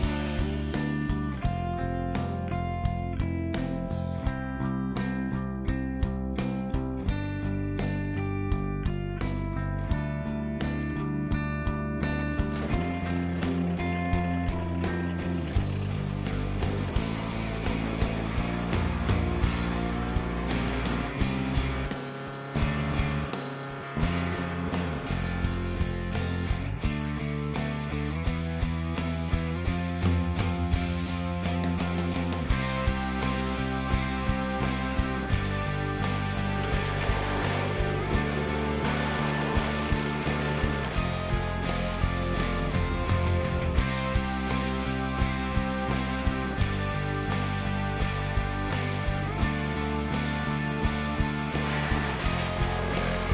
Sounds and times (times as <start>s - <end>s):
Music: 0.0s - 53.3s.